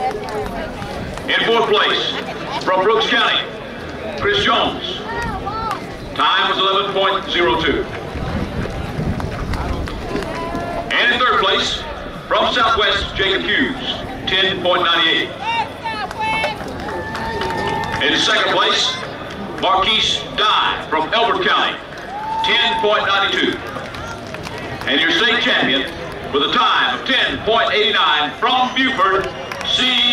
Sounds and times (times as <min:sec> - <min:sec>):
Speech: 0:00.0 - 0:08.0, 0:10.9 - 0:16.6, 0:17.6 - 0:21.8, 0:22.4 - 0:23.6, 0:24.8 - 0:30.1
Outside, urban or manmade: 0:00.0 - 0:30.1.